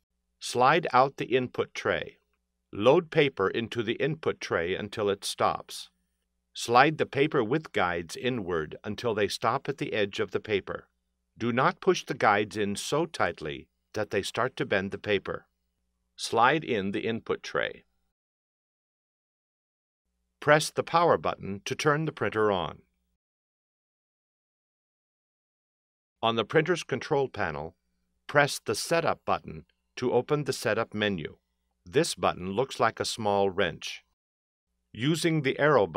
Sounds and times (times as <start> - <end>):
Speech: 0.4 - 2.2, 2.8 - 6.0, 6.6 - 15.5, 16.2 - 17.9, 20.4 - 22.9, 26.2 - 34.2, 35.0 - 35.9.